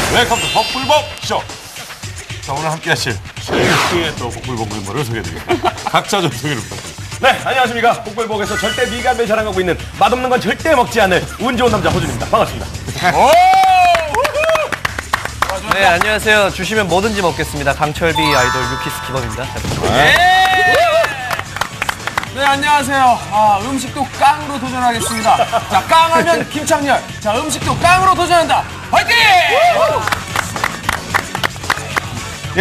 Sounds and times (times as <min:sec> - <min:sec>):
Music: 0:00.0 - 0:32.6
Speech: 0:02.5 - 0:03.2, 0:03.8 - 0:06.6, 0:07.2 - 0:13.4, 0:15.5 - 0:20.2, 0:22.4 - 0:29.5.